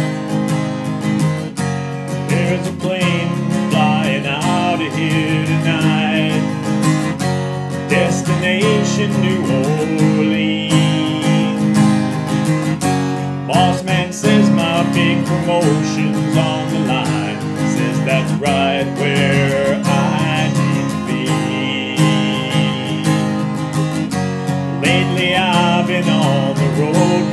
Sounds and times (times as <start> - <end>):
Guitar: 0.0 - 27.3.